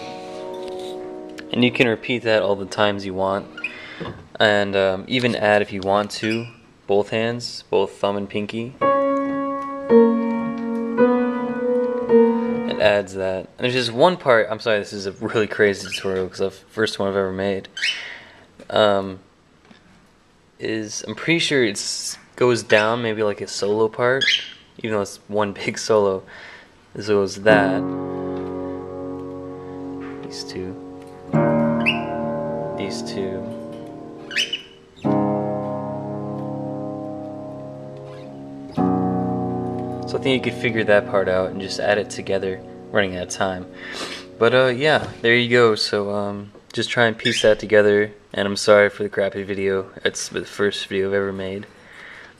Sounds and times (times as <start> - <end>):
Piano: 0.0 - 5.3, 8.8 - 13.4, 27.0 - 46.0.